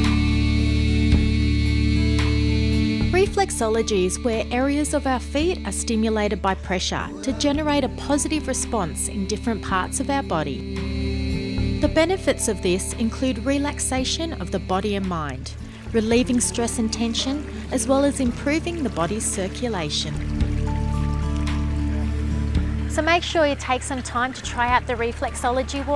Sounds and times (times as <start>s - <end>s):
Music: 0.0s - 25.9s
Speech: 3.2s - 10.6s, 11.8s - 20.2s, 22.9s - 25.9s.